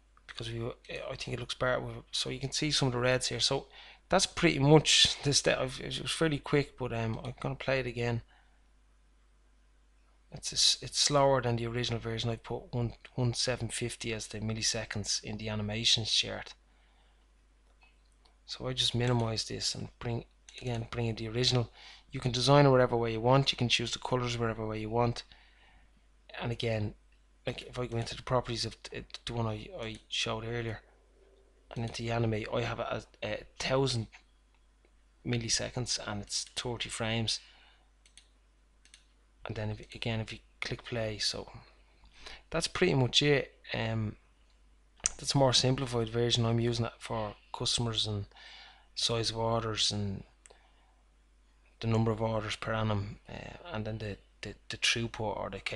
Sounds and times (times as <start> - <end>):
Speech: 0.3 - 8.3, 10.3 - 16.6, 18.5 - 25.3, 26.3 - 30.9, 31.7 - 34.2, 35.3 - 37.5, 39.5 - 41.7, 42.4 - 44.2, 45.1 - 48.4, 49.0 - 50.3, 51.8 - 55.7.